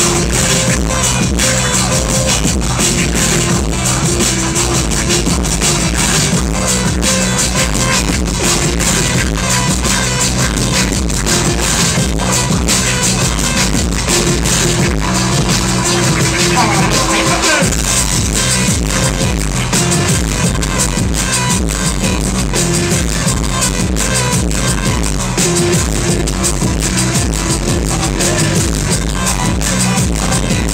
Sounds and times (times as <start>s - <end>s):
Drum: 0.0s - 30.7s.